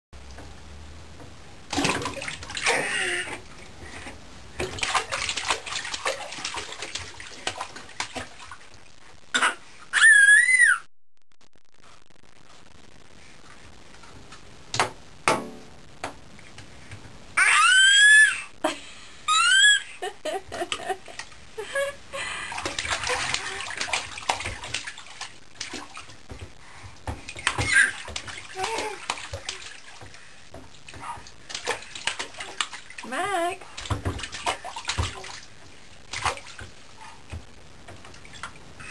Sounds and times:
Bathtub (filling or washing): 1.6s - 10.8s, 17.4s - 38.9s.

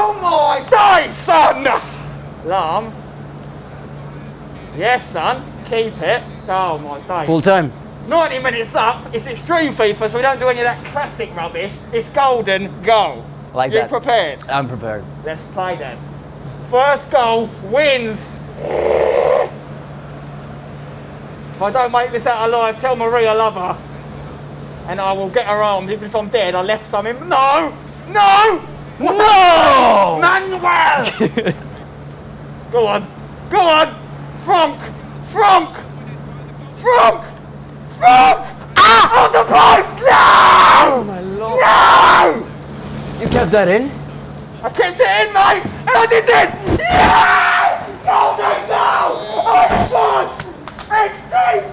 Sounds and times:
Speech: 0.0s - 3.0s, 4.1s - 16.0s, 16.6s - 18.5s, 21.6s - 23.9s, 24.8s - 31.5s, 32.7s - 37.4s, 40.7s - 42.5s, 43.2s - 46.8s, 48.3s - 51.7s.

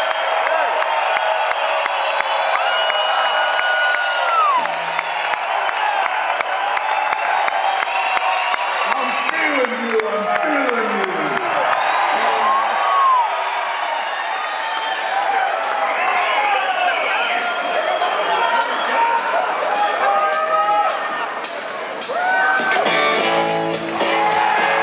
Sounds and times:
Music: 18.6s - 24.8s.

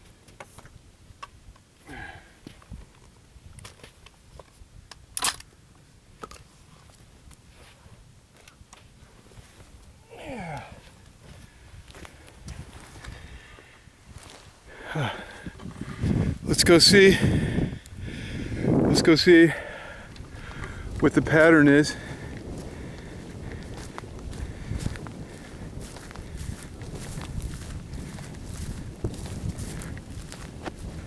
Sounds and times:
Speech: 16.5s - 17.2s, 18.9s - 19.6s, 21.0s - 22.0s.

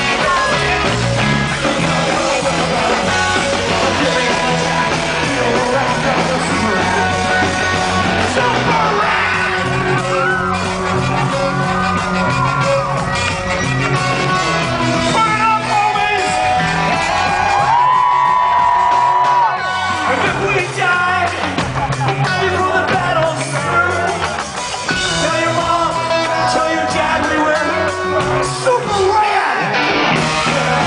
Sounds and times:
Rock and roll: 0.0s - 30.8s
Ska: 0.0s - 30.8s.

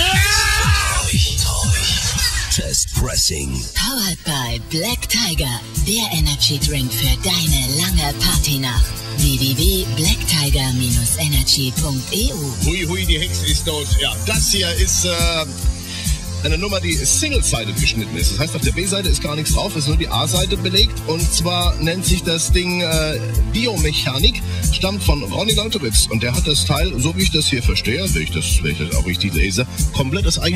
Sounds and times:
Speech: 0.0s - 15.5s, 16.4s - 30.5s.

